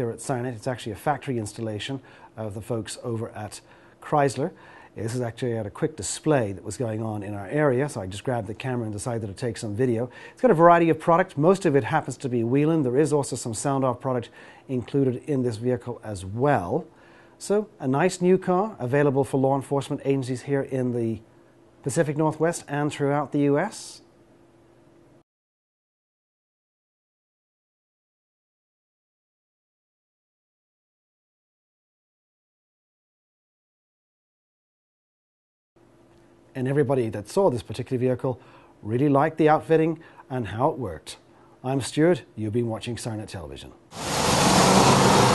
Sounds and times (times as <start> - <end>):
Speech: 0.0 - 24.1, 36.6 - 43.8.